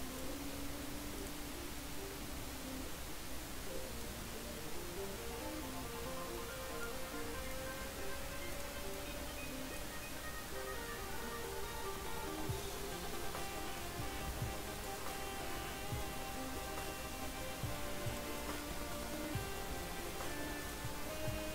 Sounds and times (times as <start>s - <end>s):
Music: 0.0s - 21.5s.